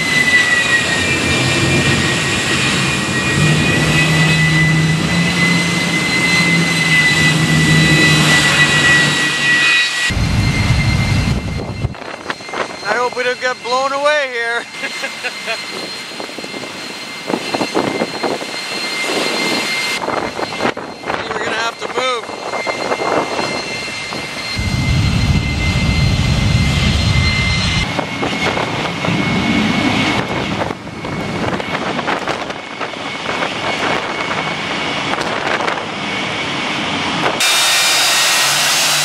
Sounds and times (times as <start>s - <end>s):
Aircraft: 0.0s - 39.0s
Speech: 12.8s - 14.7s, 21.2s - 22.3s.